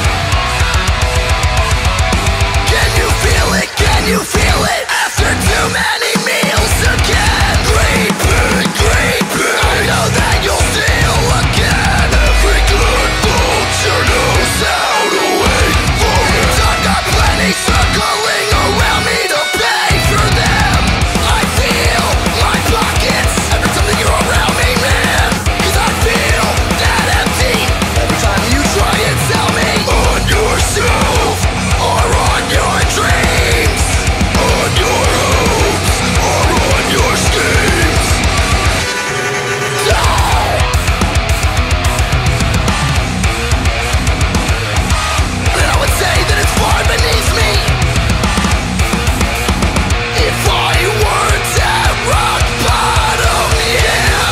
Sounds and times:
Music: 0.0 - 54.3.

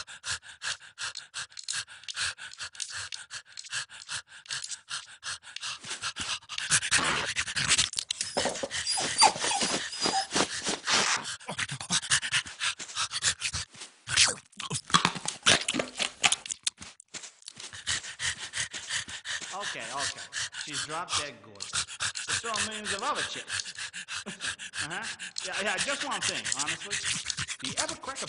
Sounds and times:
Whimper (dog): 8.2 - 11.3
Yip: 8.3 - 10.4.

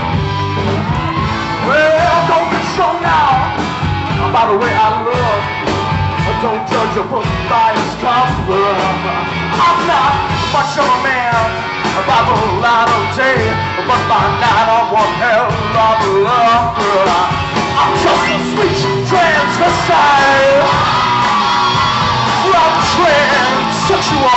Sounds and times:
Grunge: 0.0 - 24.3
Heavy metal: 0.0 - 24.3
Progressive rock: 0.0 - 24.3
Punk rock: 0.0 - 24.3
Rock and roll: 0.0 - 24.3.

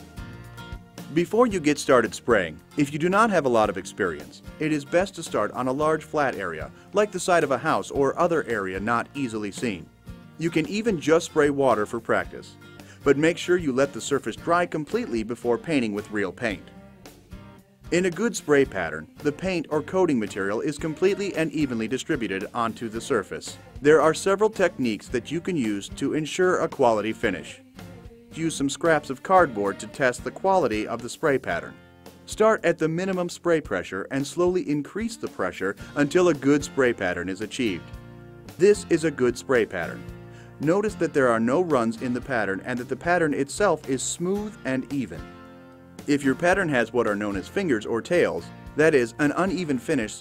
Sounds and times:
Music: 0.0 - 50.2
Speech: 1.1 - 16.7, 17.9 - 27.6, 28.3 - 31.7, 32.3 - 37.9, 38.6 - 40.0, 40.6 - 45.3, 46.1 - 50.2.

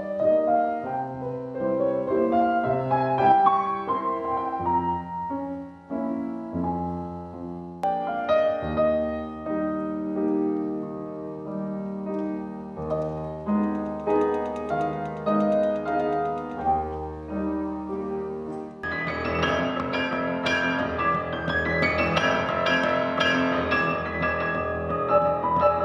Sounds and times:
Classical music: 0.0 - 25.8
Piano: 0.0 - 25.8.

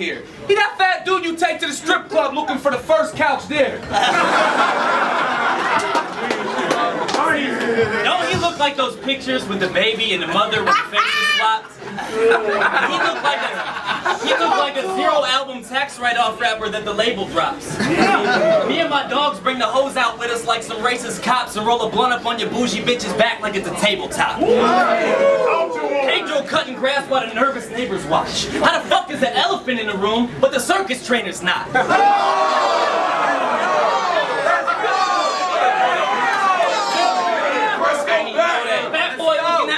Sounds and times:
Speech: 0.0 - 3.8, 6.8 - 31.8, 36.8 - 39.7.

